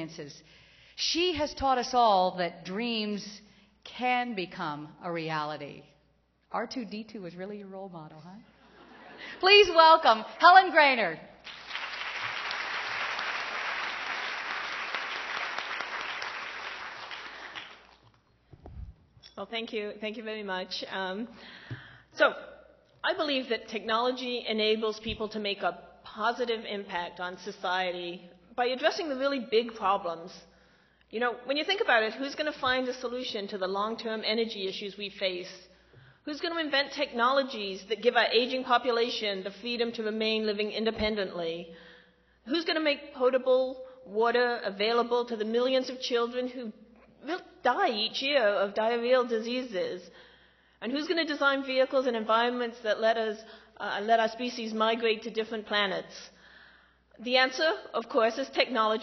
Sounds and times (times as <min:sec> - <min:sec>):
Female speech, woman speaking: 0:00.0 - 0:00.4, 0:01.0 - 0:05.8, 0:06.5 - 0:08.5, 0:09.4 - 0:11.3, 0:19.4 - 0:21.3, 0:23.1 - 0:30.4, 0:31.2 - 0:35.6, 0:36.3 - 0:41.7, 0:42.5 - 0:50.1, 0:50.8 - 0:56.3, 0:57.2 - 0:59.0
Narration, monologue: 0:00.0 - 0:12.9, 0:17.4 - 0:59.0.